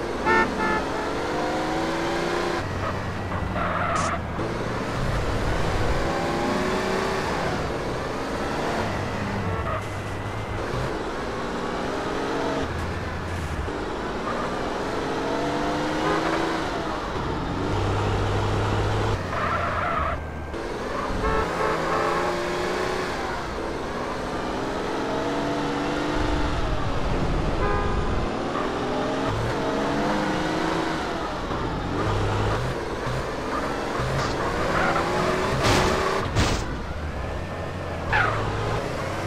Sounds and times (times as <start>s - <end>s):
Car: 0.0s - 39.2s.